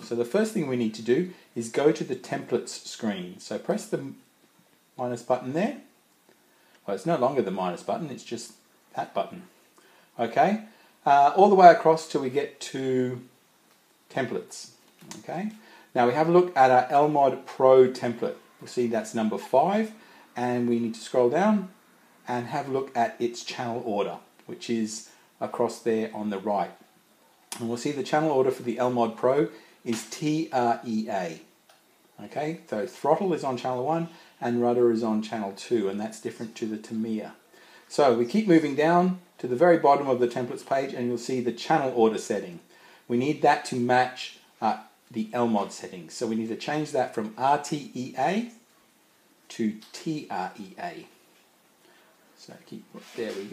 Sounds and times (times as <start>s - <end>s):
Speech: 0.0s - 4.3s, 5.0s - 5.9s, 6.8s - 9.5s, 10.2s - 13.3s, 14.1s - 26.8s, 27.5s - 31.5s, 32.2s - 48.6s, 49.5s - 51.2s, 52.4s - 53.5s.